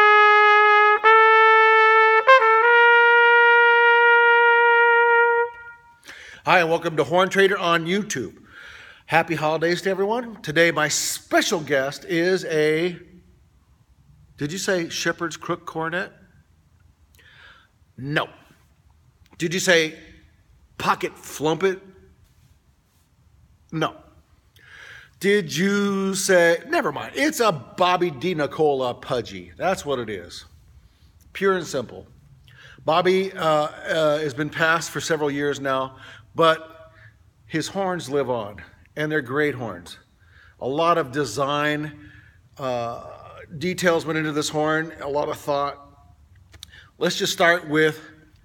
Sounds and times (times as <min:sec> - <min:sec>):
Speech: 0:06.5 - 0:08.4, 0:09.1 - 0:13.1, 0:14.4 - 0:16.2, 0:18.0 - 0:18.4, 0:19.4 - 0:20.2, 0:20.8 - 0:21.9, 0:23.7 - 0:24.1, 0:25.2 - 0:30.5, 0:31.3 - 0:32.1, 0:32.8 - 0:36.7, 0:37.5 - 0:40.0, 0:40.6 - 0:42.0, 0:42.6 - 0:45.9, 0:47.0 - 0:48.2.